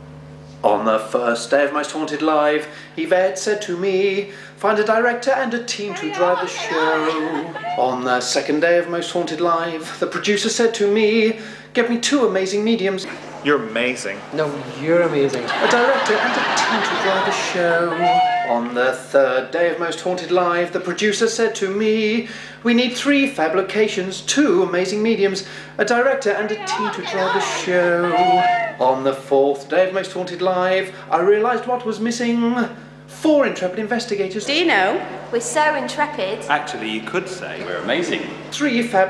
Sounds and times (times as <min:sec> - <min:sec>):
Speech: 0:00.6 - 0:02.7, 0:04.6 - 0:10.6, 0:11.8 - 0:17.5, 0:22.7 - 0:39.1
Male singing: 0:03.0 - 0:11.4, 0:15.6 - 0:30.7.